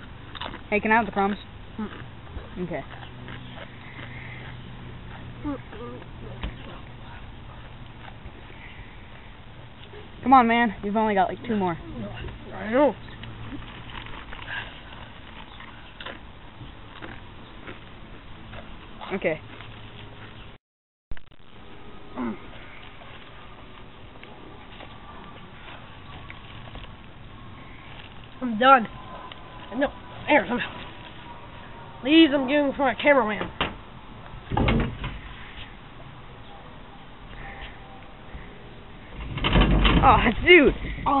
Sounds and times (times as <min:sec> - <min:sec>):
Door: 0:34.5 - 0:35.2, 0:39.2 - 0:40.1.